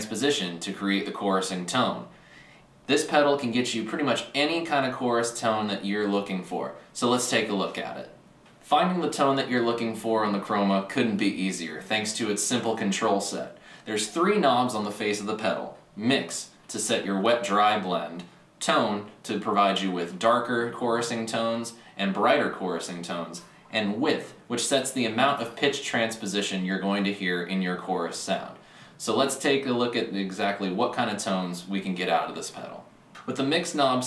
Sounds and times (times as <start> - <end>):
Speech: 0.0 - 2.1, 2.9 - 34.0.